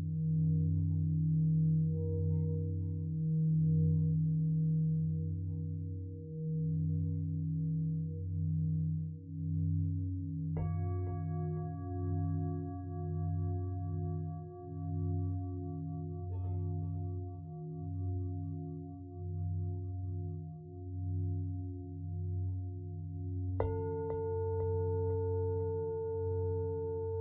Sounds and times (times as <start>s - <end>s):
Singing bowl: 0.0s - 27.2s.